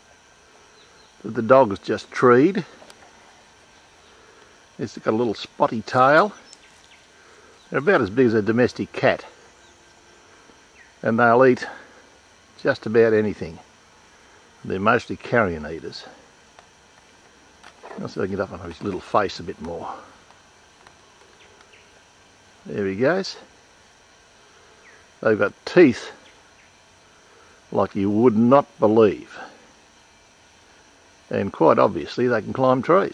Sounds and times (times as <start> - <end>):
Speech: 1.2 - 2.7, 4.8 - 6.4, 7.7 - 9.3, 11.0 - 11.9, 12.6 - 13.7, 14.6 - 16.2, 17.9 - 20.2, 22.6 - 23.5, 25.2 - 26.2, 27.7 - 29.6, 31.3 - 33.1.